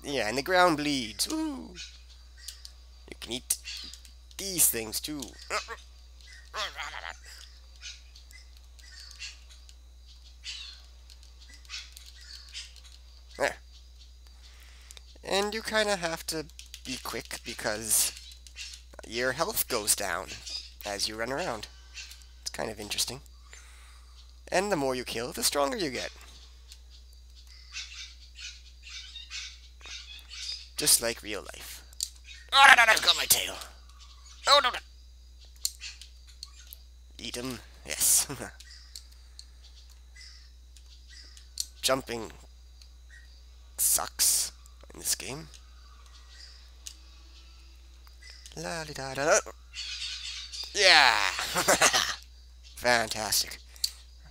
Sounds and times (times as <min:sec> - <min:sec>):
Speech: 0:00.0 - 0:01.8, 0:03.1 - 0:03.6, 0:04.4 - 0:05.8, 0:06.6 - 0:07.2, 0:13.4 - 0:13.6, 0:15.2 - 0:18.2, 0:19.0 - 0:21.7, 0:22.5 - 0:23.2, 0:24.5 - 0:26.1, 0:30.8 - 0:31.8, 0:32.6 - 0:33.8, 0:34.5 - 0:34.8, 0:37.2 - 0:38.6, 0:41.8 - 0:42.4, 0:43.8 - 0:45.5, 0:48.6 - 0:49.5, 0:50.8 - 0:52.1, 0:52.8 - 0:53.6.